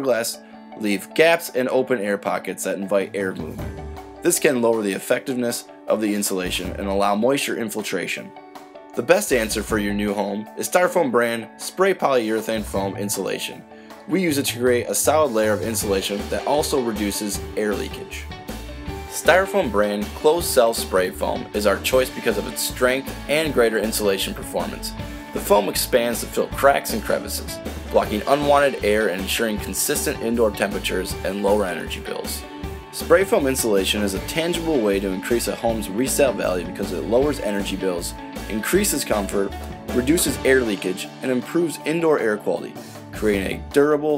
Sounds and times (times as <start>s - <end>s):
Speech: 0.0s - 8.3s, 9.0s - 18.3s, 19.1s - 32.4s, 33.0s - 44.1s
Music: 0.0s - 44.1s.